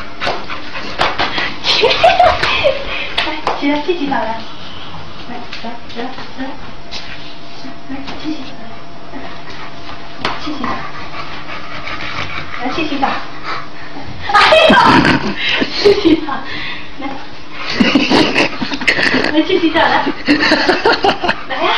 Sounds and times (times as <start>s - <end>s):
Speech: 7.9s - 9.4s, 10.4s - 10.9s, 12.6s - 13.3s, 14.0s - 15.0s, 21.5s - 21.7s.